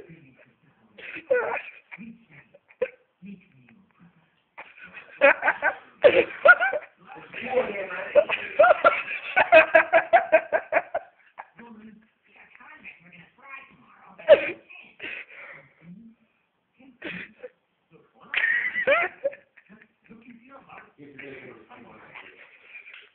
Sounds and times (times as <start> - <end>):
Male speech, man speaking: 0.0 - 1.2, 3.2 - 4.3, 6.9 - 8.6, 11.5 - 12.1, 19.7 - 22.5.